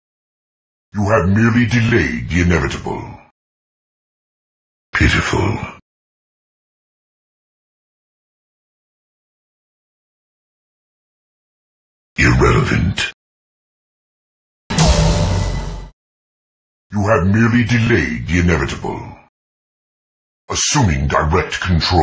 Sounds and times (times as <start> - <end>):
Speech: 1.0 - 3.3, 5.0 - 5.8, 12.2 - 13.2, 16.9 - 19.3, 20.5 - 22.0
Sound effect: 14.7 - 16.0.